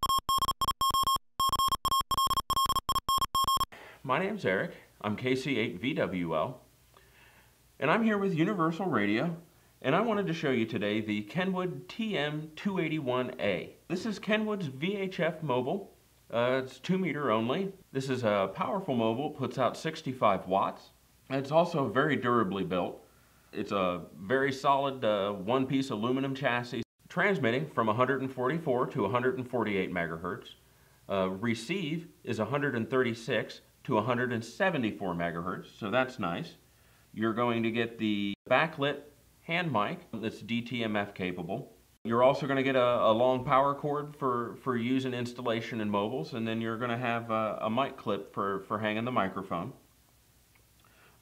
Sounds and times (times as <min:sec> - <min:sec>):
Speech: 0:04.0 - 0:06.6, 0:07.8 - 0:23.0, 0:23.6 - 0:36.6, 0:37.2 - 0:49.8.